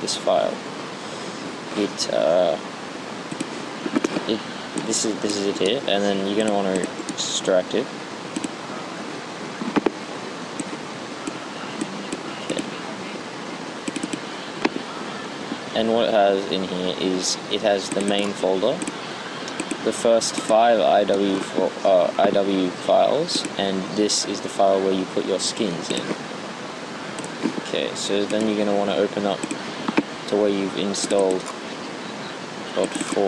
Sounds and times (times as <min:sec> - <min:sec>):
Speech: 0:00.0 - 0:00.6, 0:01.8 - 0:02.6, 0:04.3 - 0:07.9, 0:11.4 - 0:13.2, 0:14.8 - 0:18.8, 0:19.8 - 0:26.2, 0:27.6 - 0:29.4, 0:30.3 - 0:31.5, 0:32.7 - 0:33.2.